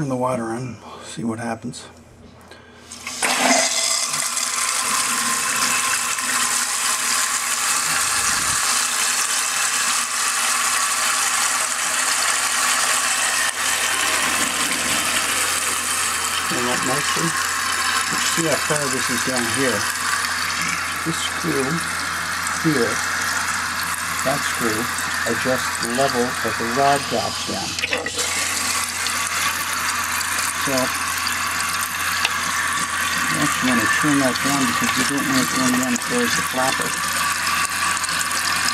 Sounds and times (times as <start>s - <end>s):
Water: 3.8s - 38.7s.